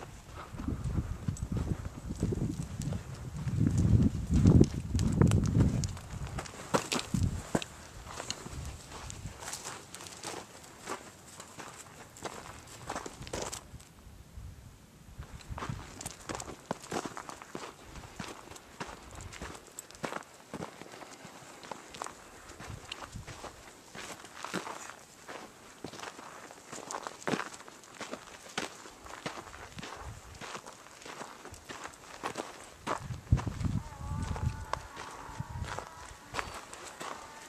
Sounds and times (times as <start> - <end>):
Walk, footsteps: 0.0 - 13.7, 15.2 - 37.4.